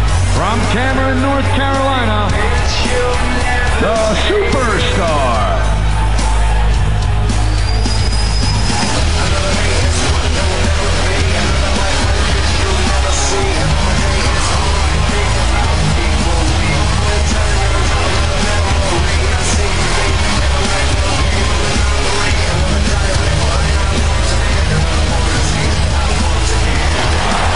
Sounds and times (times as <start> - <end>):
Music: 0.0 - 27.5
Speech: 0.4 - 2.9, 3.7 - 5.7.